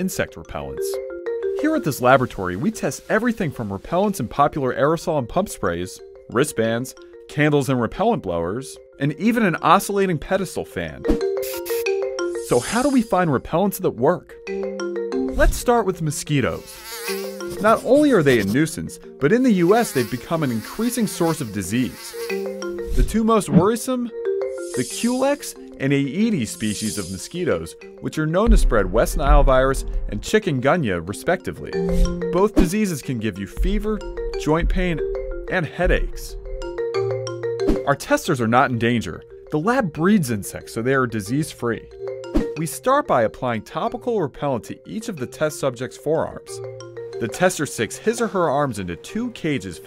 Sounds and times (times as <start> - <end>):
Fly, housefly: 11.2 - 13.2, 16.2 - 28.0
Mosquito: 11.4 - 13.1, 16.5 - 18.6, 19.5 - 23.0, 24.6 - 25.5, 26.6 - 27.2.